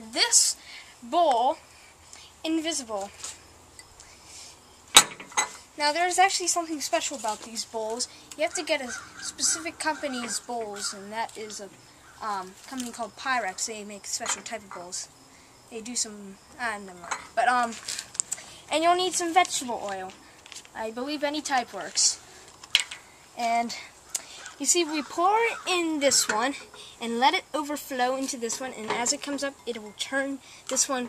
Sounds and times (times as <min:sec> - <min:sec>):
Speech: 0:00.0 - 0:01.6, 0:02.4 - 0:03.1, 0:05.8 - 0:15.1, 0:15.7 - 0:17.8, 0:18.7 - 0:20.2, 0:20.8 - 0:22.2, 0:23.4 - 0:23.9, 0:24.6 - 0:31.0.